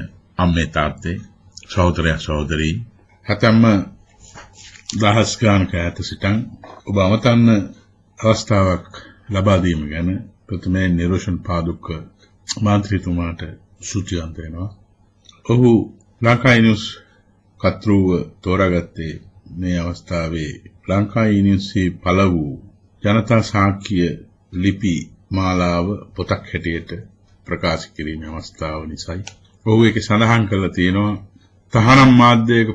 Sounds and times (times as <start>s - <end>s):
Male speech, man speaking: 0.0s - 4.0s, 4.8s - 14.8s, 15.4s - 17.0s, 17.6s - 32.7s
Narration, monologue: 0.0s - 32.7s.